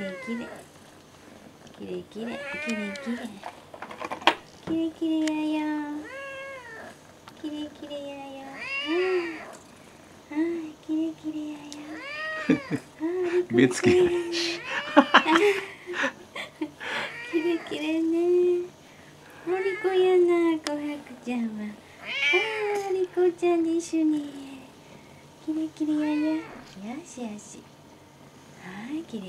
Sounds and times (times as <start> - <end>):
Meow: 0.0 - 0.6, 2.3 - 3.3, 6.0 - 6.9, 8.5 - 9.5, 11.8 - 12.8, 14.6 - 15.3, 17.1 - 17.8, 22.0 - 22.8, 26.0 - 26.6
Speech: 0.0 - 0.6, 1.8 - 3.4, 4.7 - 6.0, 7.4 - 9.4, 19.5 - 21.8, 22.4 - 24.7, 25.4 - 27.6, 28.6 - 29.2.